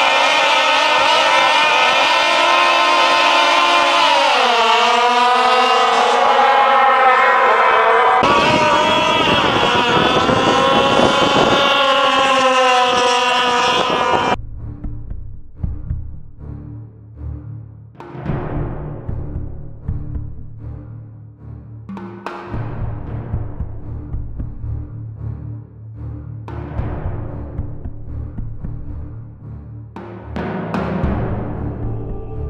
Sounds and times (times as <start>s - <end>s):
Music: 14.4s - 32.4s.